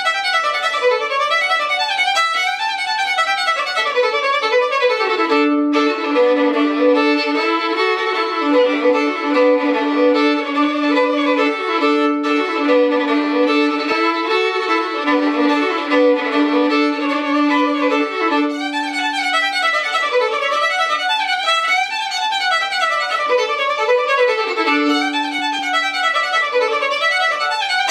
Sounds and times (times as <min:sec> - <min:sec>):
Violin, fiddle: 0:00.0 - 0:27.9.